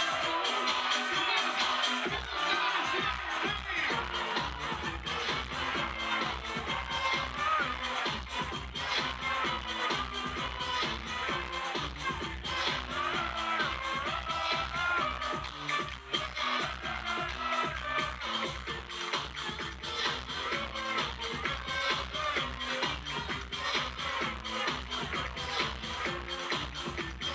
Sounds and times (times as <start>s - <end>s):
Music: 0.0s - 27.3s.